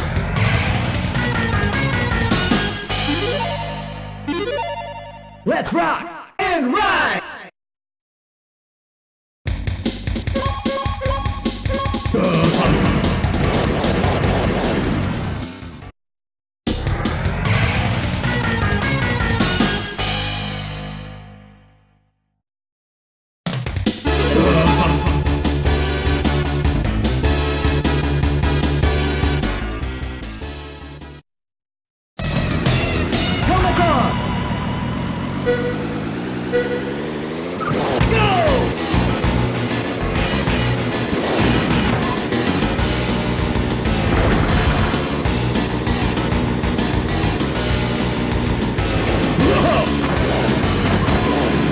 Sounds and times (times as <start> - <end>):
Music: 0.0 - 5.5, 9.5 - 15.9, 16.7 - 22.2, 23.5 - 31.2, 32.2 - 34.2, 38.0 - 51.7.